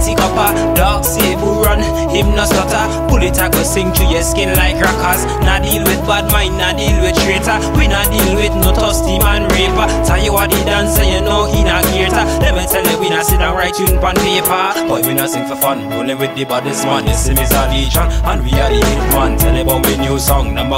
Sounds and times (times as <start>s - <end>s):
Independent music: 0.0s - 20.7s.